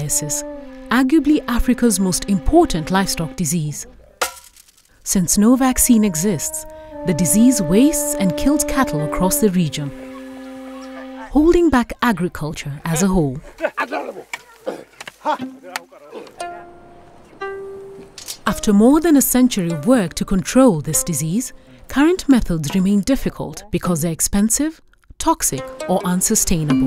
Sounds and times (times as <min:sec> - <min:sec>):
Music: 0:00.0 - 0:03.9, 0:05.2 - 0:11.8, 0:15.4 - 0:15.8, 0:16.4 - 0:23.0, 0:25.4 - 0:26.8
Speech: 0:00.0 - 0:04.2, 0:05.1 - 0:16.3, 0:18.5 - 0:26.8.